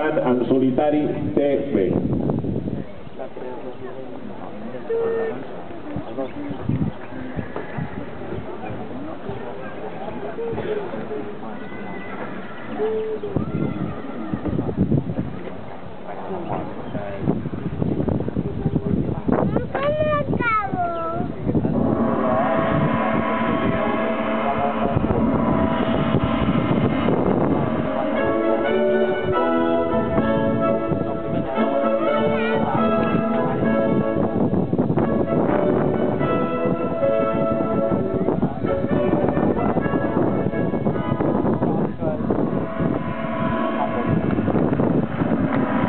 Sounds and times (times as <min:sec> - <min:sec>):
Music: 0:21.8 - 0:45.8.